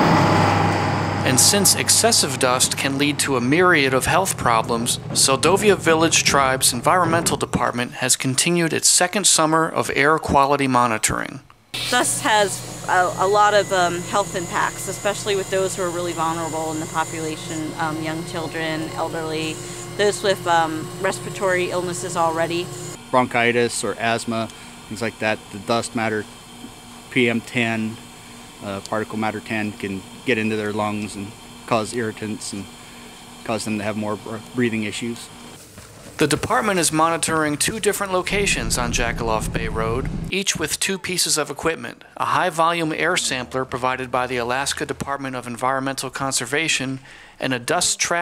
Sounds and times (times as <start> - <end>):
Speech: 1.2 - 26.2, 27.1 - 28.0, 28.6 - 32.7, 33.5 - 35.3, 36.2 - 48.2.